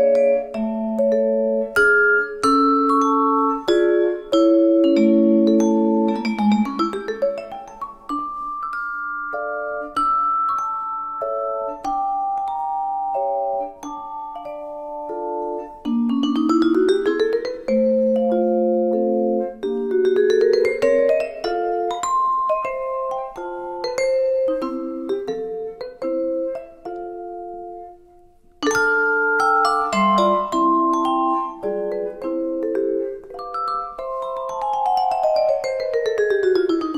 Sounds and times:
Percussion: 0.0s - 36.9s.

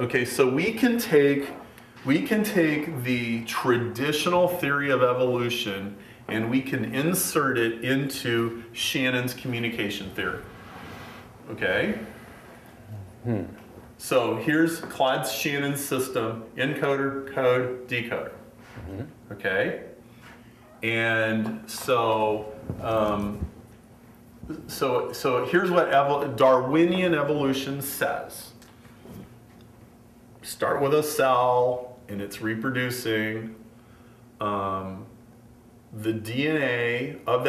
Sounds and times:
Speech: 0.0s - 10.5s, 11.5s - 12.2s, 13.0s - 20.0s, 20.8s - 23.5s, 24.5s - 28.6s, 30.4s - 33.6s, 34.4s - 35.1s, 36.0s - 37.4s.

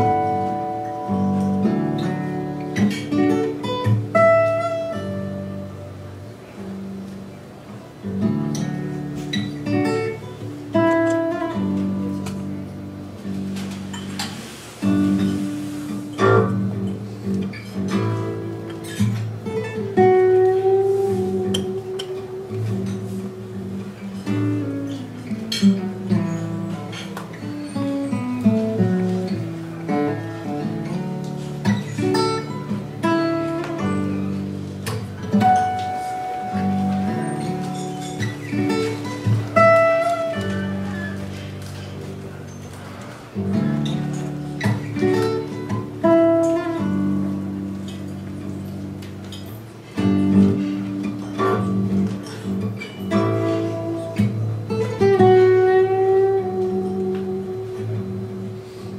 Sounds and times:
Strum: 0.0s - 58.9s.

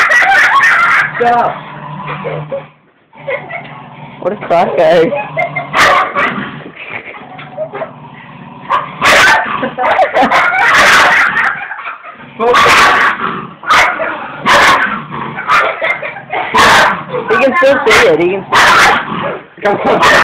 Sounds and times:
Bow-wow: 0.0s - 1.3s, 5.1s - 6.4s, 8.7s - 20.2s
Speech: 17.2s - 18.5s.

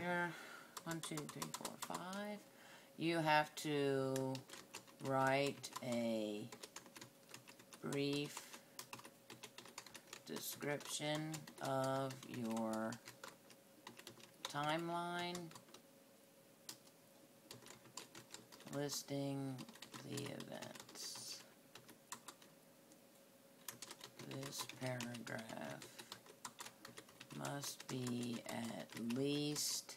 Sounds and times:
Speech: 0.0s - 2.4s, 3.0s - 4.4s, 5.0s - 6.5s, 7.8s - 8.4s, 10.3s - 13.0s, 14.5s - 15.5s, 18.7s - 21.5s, 24.2s - 26.0s, 27.4s - 29.9s
Typing: 0.8s - 2.2s, 4.1s - 15.8s, 17.5s - 18.8s, 19.6s - 22.5s, 23.6s - 29.8s.

